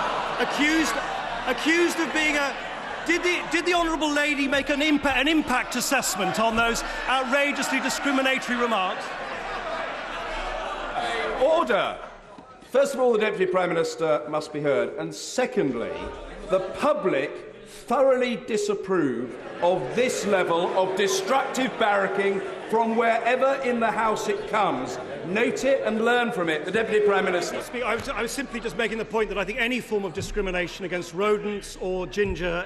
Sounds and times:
Speech: 0:00.4 - 0:09.1, 0:11.0 - 0:12.1, 0:12.7 - 0:32.6.

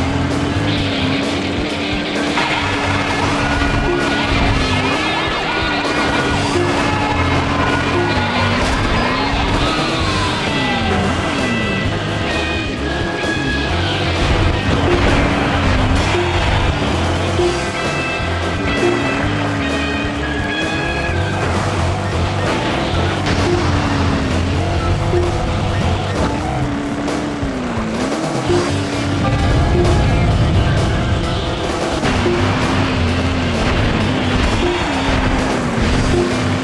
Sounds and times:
Car: 0:00.0 - 0:36.6
Music: 0:00.0 - 0:36.6.

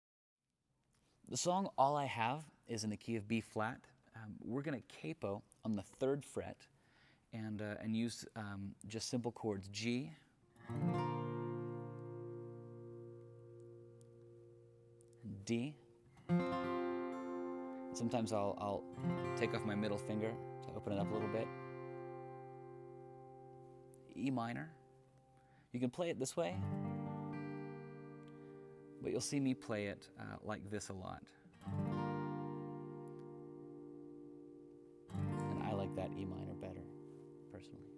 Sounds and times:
Speech: 0:01.3 - 0:06.7, 0:07.3 - 0:10.3, 0:15.2 - 0:15.8, 0:18.0 - 0:21.5, 0:24.1 - 0:24.8, 0:25.7 - 0:26.6, 0:29.0 - 0:31.4, 0:35.4 - 0:36.9, 0:37.5 - 0:37.9
Strum: 0:26.5 - 0:37.9.

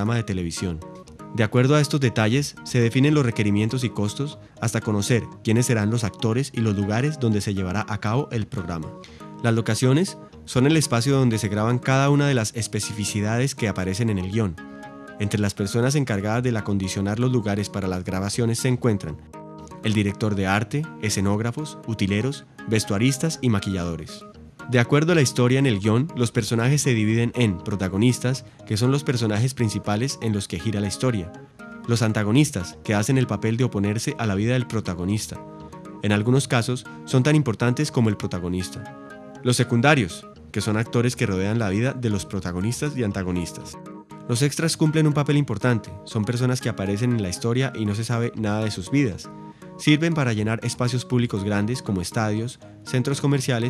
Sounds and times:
Speech: 0:00.0 - 0:00.8, 0:01.4 - 0:14.6, 0:15.2 - 0:19.2, 0:19.8 - 0:35.4, 0:36.0 - 0:38.9, 0:39.5 - 0:53.6
Music: 0:00.0 - 0:53.6.

